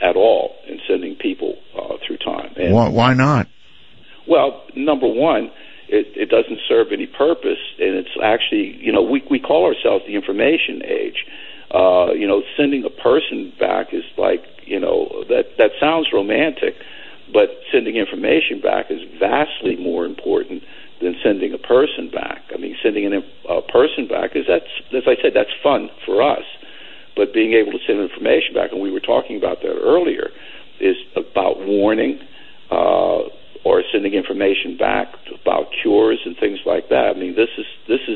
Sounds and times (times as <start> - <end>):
Speech: 0.0 - 3.5, 4.3 - 26.6, 27.2 - 38.1.